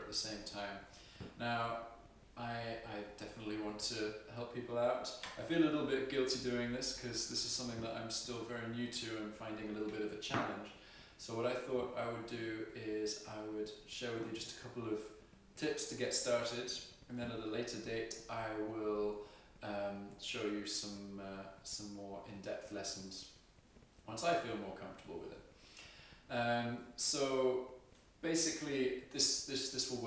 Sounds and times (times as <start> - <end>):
Speech: 0.0 - 23.4, 24.0 - 25.5, 26.3 - 30.0.